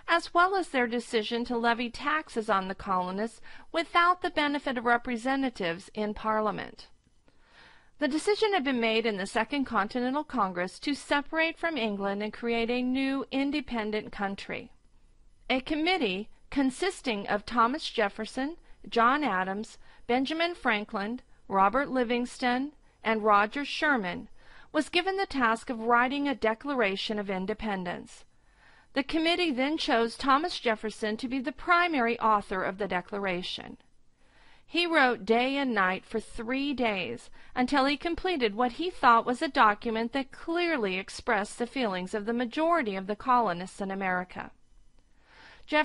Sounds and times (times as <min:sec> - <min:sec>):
Speech: 0:00.0 - 0:06.9, 0:08.0 - 0:14.8, 0:15.5 - 0:28.2, 0:29.0 - 0:33.8, 0:34.7 - 0:44.6.